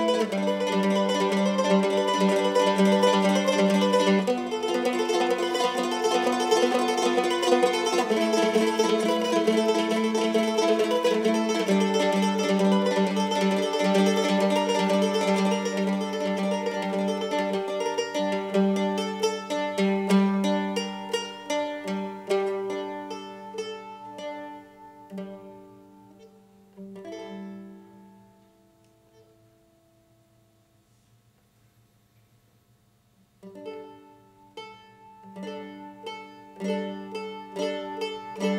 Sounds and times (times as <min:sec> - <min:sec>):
Mandolin: 0:00.0 - 0:31.2, 0:33.3 - 0:38.5.